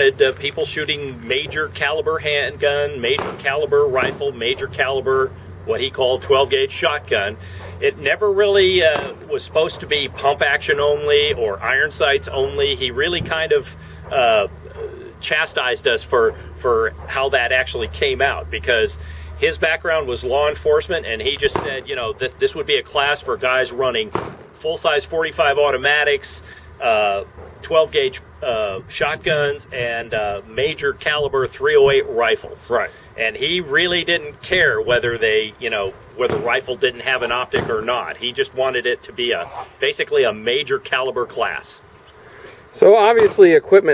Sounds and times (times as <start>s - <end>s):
Gunshot, gunfire: 3.1s - 4.3s, 8.9s - 9.3s, 21.4s - 21.8s, 24.1s - 24.6s, 36.3s - 36.6s, 37.5s - 37.9s.